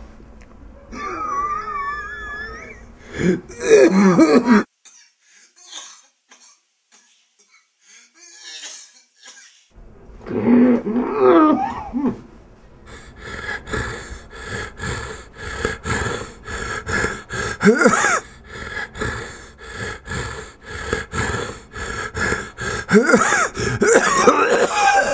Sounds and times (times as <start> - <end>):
Inside, small room: 0.0 - 25.1
Cough: 3.2 - 9.7, 17.6 - 18.3, 22.9 - 25.1.